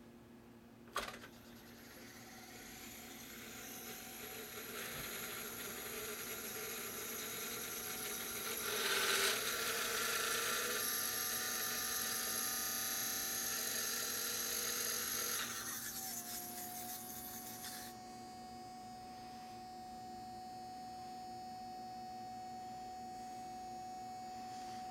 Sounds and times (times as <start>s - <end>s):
Inside, small room: 0.0s - 24.9s.